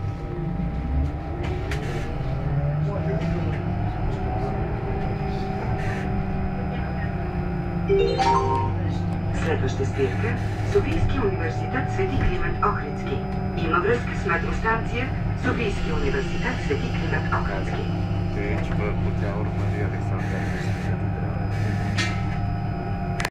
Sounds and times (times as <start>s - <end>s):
Bus: 0.0s - 7.9s, 8.7s - 23.3s
Speech: 1.4s - 7.3s, 7.9s - 21.5s.